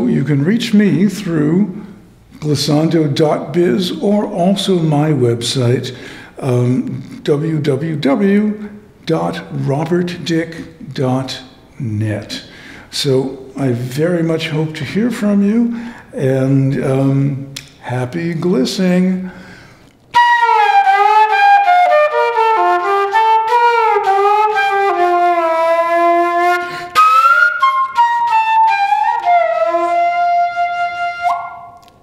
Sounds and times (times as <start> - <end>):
Flute: 20.2 - 31.9.